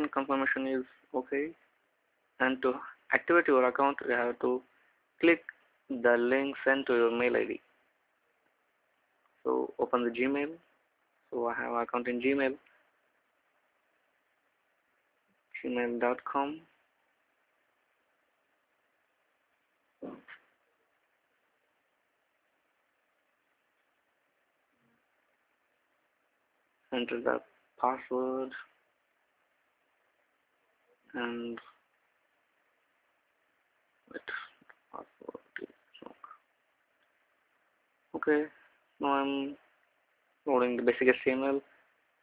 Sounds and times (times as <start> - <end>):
Speech: 0.0 - 1.6, 2.4 - 7.7, 9.4 - 10.7, 11.3 - 12.7, 15.5 - 16.8, 20.0 - 20.4, 26.9 - 28.8, 31.1 - 31.8, 34.1 - 36.4, 38.1 - 39.7, 40.4 - 41.8
Inside, small room: 0.0 - 42.2
Silence: 0.9 - 3.1, 4.6 - 5.9, 7.6 - 9.5, 10.6 - 11.4, 12.6 - 15.7, 16.4 - 39.0, 39.6 - 40.5, 41.6 - 42.2.